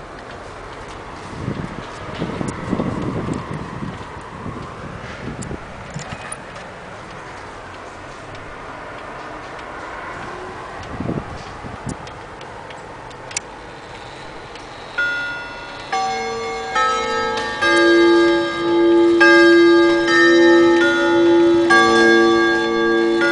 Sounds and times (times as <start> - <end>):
Tick-tock: 7.1 - 17.9.